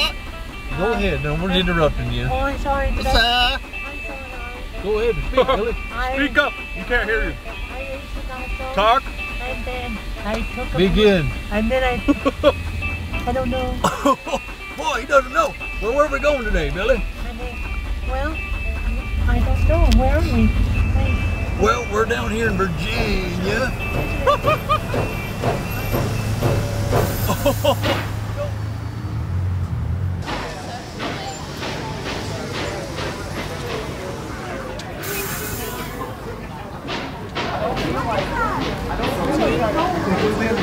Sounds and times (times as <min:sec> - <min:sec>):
Music: 0:00.0 - 0:27.8
Vehicle: 0:00.0 - 0:40.6.